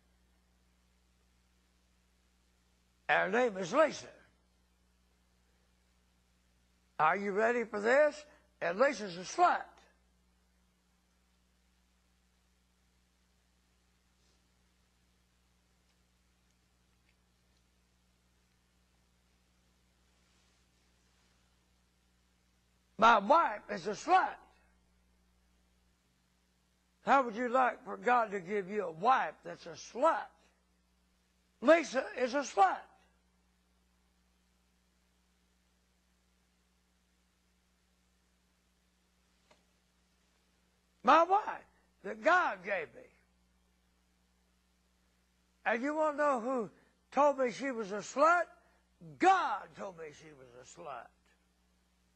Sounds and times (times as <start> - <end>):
Speech: 3.1 - 4.4, 7.0 - 10.0, 23.0 - 24.6, 27.0 - 30.4, 31.6 - 33.0, 41.0 - 43.3, 45.6 - 51.2.